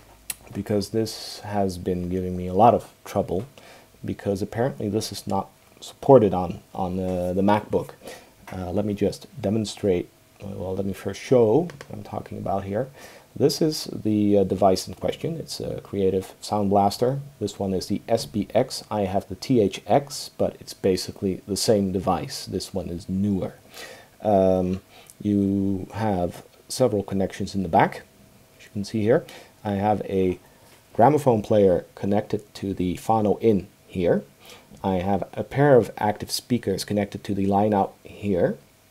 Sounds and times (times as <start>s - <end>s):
Inside, small room: 0.0s - 38.9s
Speech: 0.3s - 23.6s, 24.2s - 30.4s, 31.0s - 38.6s.